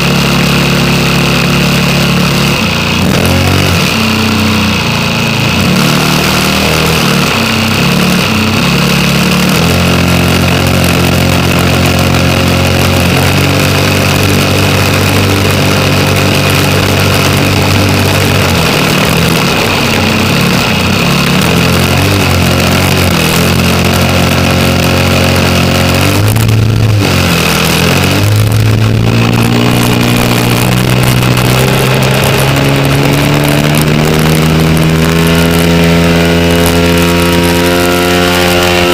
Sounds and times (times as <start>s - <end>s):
Engine: 0.0s - 38.9s
Vehicle: 0.0s - 38.9s.